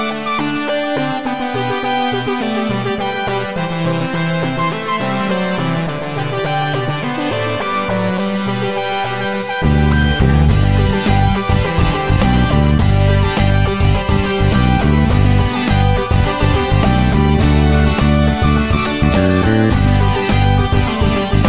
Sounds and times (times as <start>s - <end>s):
Cacophony: 0.0s - 21.4s.